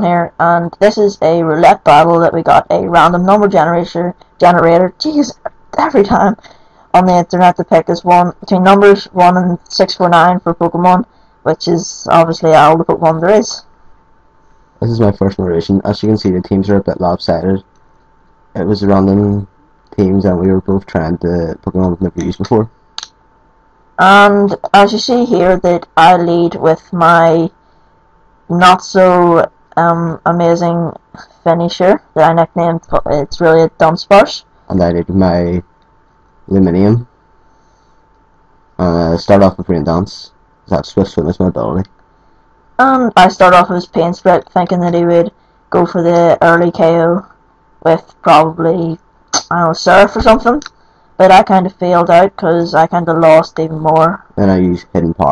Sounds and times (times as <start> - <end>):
Narration, monologue: 0.0 - 55.3.